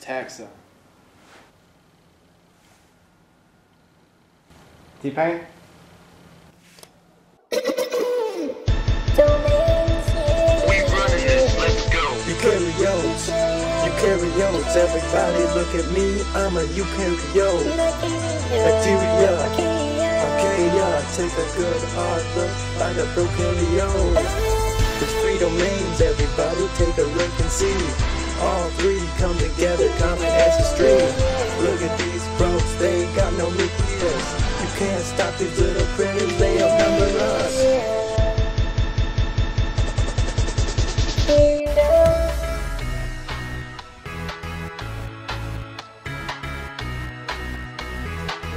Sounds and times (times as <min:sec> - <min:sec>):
Music: 0:08.4 - 0:48.5.